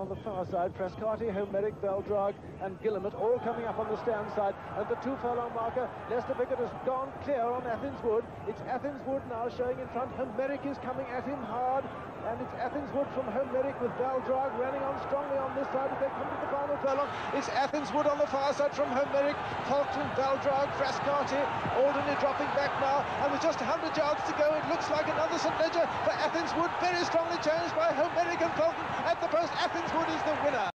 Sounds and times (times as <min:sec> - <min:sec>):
Speech: 0:00.0 - 0:30.7.